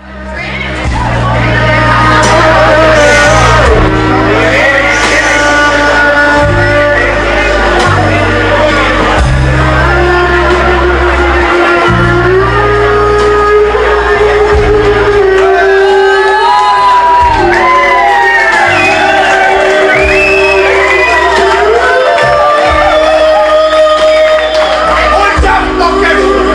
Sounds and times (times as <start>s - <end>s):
Musical instrument: 0.0s - 26.5s.